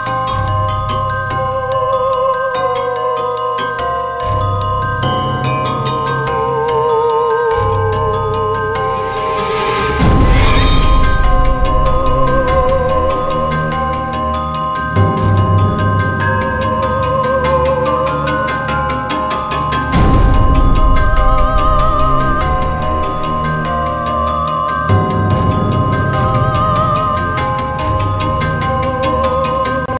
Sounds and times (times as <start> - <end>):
Background music: 0.0 - 29.9.